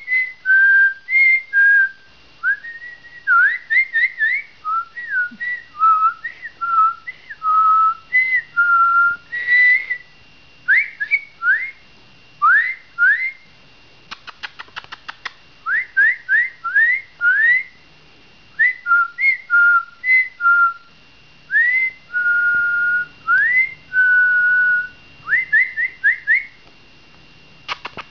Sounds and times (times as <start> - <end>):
Whistling: 0.0 - 10.1, 10.7 - 11.8, 12.4 - 13.5, 15.6 - 17.8, 18.6 - 20.9, 21.5 - 26.6.